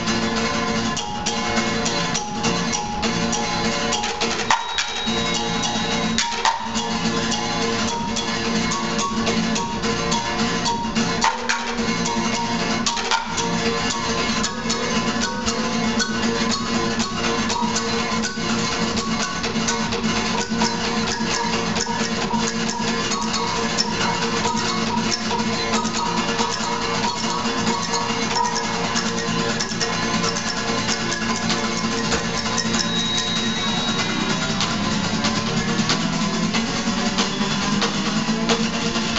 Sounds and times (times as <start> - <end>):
Percussion: 0.0 - 39.1.